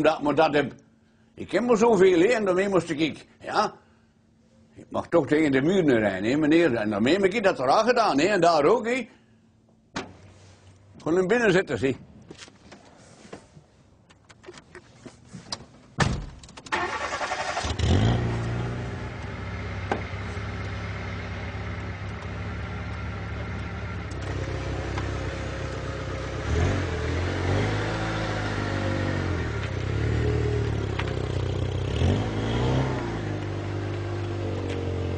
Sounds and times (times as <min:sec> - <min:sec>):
Speech: 0:00.0 - 0:00.8, 0:01.4 - 0:03.8, 0:04.8 - 0:09.2, 0:11.0 - 0:12.0.